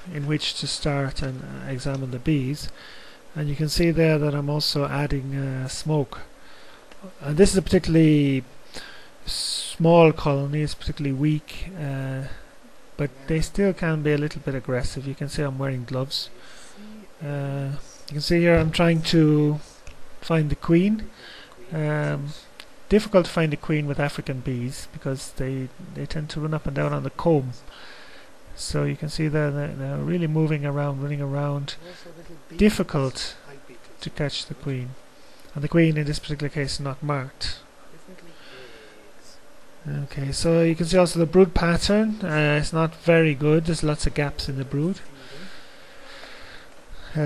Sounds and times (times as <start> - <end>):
Speech: 0.0 - 2.8, 3.4 - 6.3, 7.0 - 8.5, 9.3 - 12.4, 13.0 - 27.7, 28.6 - 45.5.